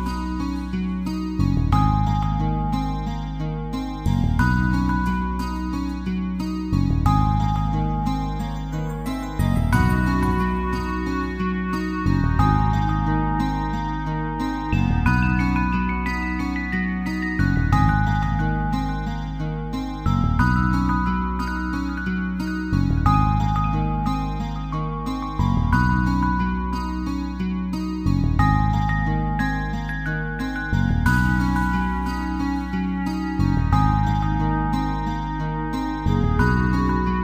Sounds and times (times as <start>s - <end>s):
Music: 0.0s - 37.2s.